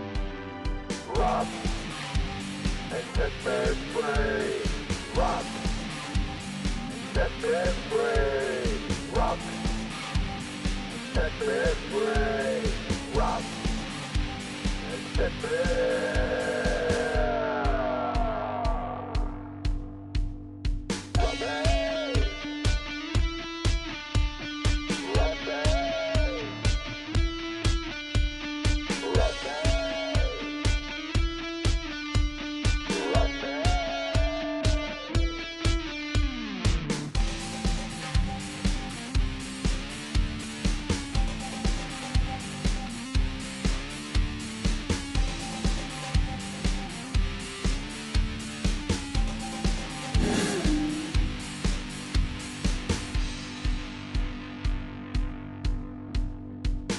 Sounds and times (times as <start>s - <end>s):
Exciting music: 0.0s - 27.8s, 32.7s - 54.2s
Punk rock: 0.0s - 56.9s
Rock and roll: 0.0s - 56.9s.